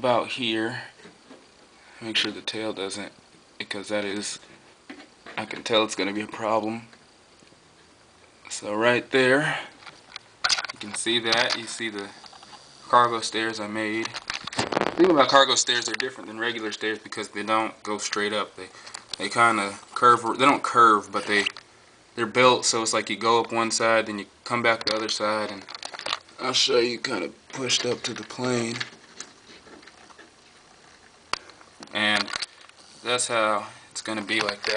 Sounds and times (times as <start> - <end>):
Speech: 0.0 - 1.0, 2.0 - 4.4, 5.3 - 6.9, 8.5 - 9.7, 10.8 - 12.2, 12.9 - 14.2, 15.0 - 21.5, 22.2 - 25.7, 26.4 - 28.9, 31.9 - 32.3, 33.0 - 34.7.